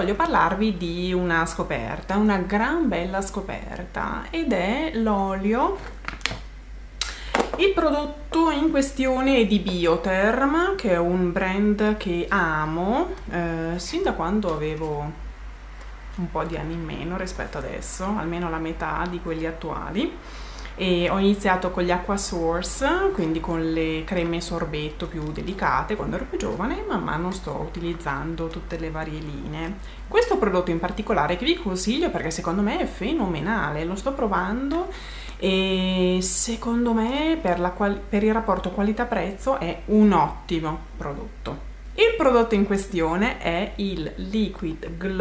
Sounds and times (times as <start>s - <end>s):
Speech: 0.0s - 5.9s, 7.5s - 15.2s, 16.2s - 20.2s, 20.8s - 45.2s.